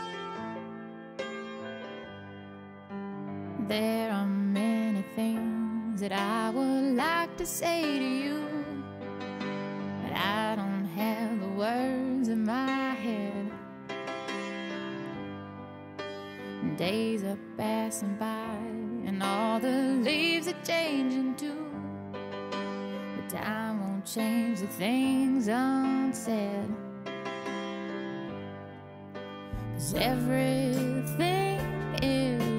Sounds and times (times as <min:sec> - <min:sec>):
Music: 0:00.0 - 0:32.5.